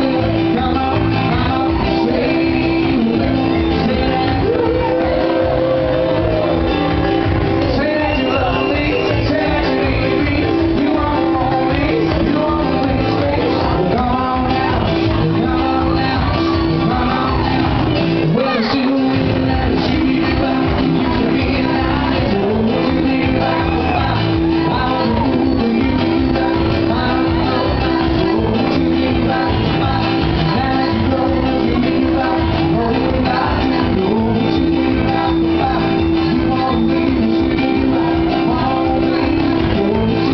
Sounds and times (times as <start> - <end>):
Music: 0.0 - 40.3
Speech: 18.2 - 19.3.